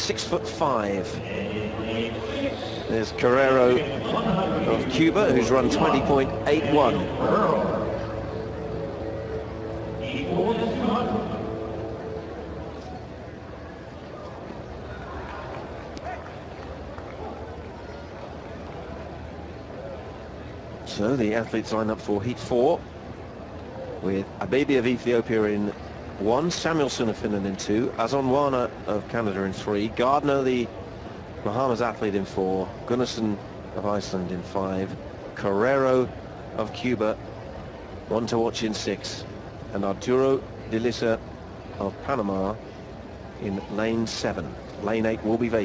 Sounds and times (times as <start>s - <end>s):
Speech: 0.0s - 8.0s, 10.0s - 11.6s, 24.0s - 30.7s, 31.4s - 37.2s, 38.1s - 41.2s, 41.8s - 42.6s, 43.4s - 45.6s.